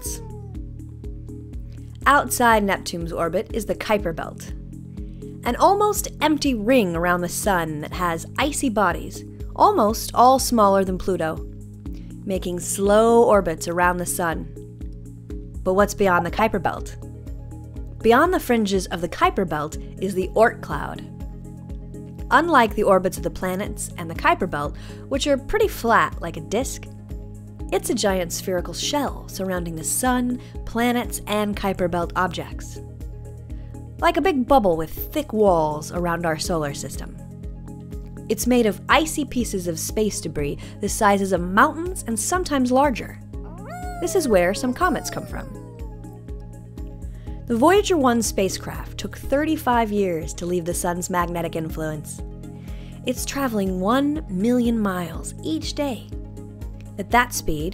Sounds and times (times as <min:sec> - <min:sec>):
Speech: 0:00.0 - 0:00.3, 0:02.0 - 0:04.5, 0:05.4 - 0:11.4, 0:12.3 - 0:14.5, 0:15.7 - 0:17.0, 0:18.0 - 0:21.1, 0:22.3 - 0:26.8, 0:27.7 - 0:32.8, 0:34.0 - 0:37.2, 0:38.3 - 0:45.7, 0:47.5 - 0:52.2, 0:53.1 - 0:56.1, 0:57.0 - 0:57.7
Music: 0:00.0 - 0:57.7.